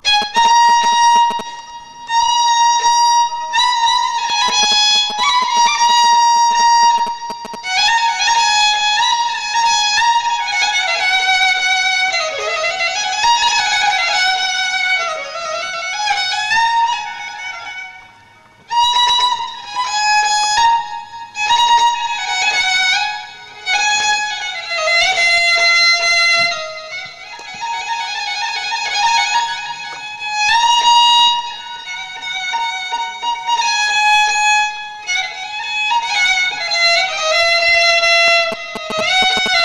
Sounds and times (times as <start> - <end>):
Violin, fiddle: 0.0 - 39.6.